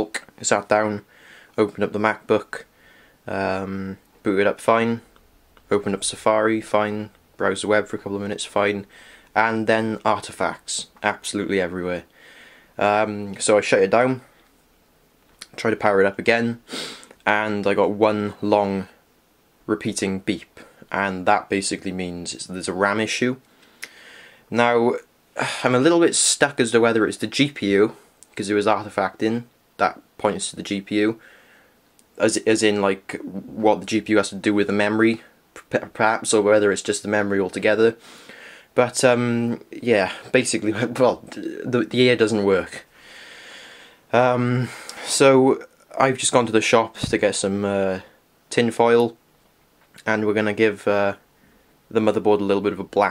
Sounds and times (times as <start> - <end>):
Speech: 0.0 - 2.7, 3.3 - 5.1, 5.7 - 12.1, 12.8 - 14.3, 15.4 - 16.6, 17.2 - 19.0, 19.7 - 23.4, 24.5 - 31.2, 32.2 - 38.0, 38.8 - 42.9, 44.1 - 49.2, 50.0 - 51.2, 51.9 - 53.1.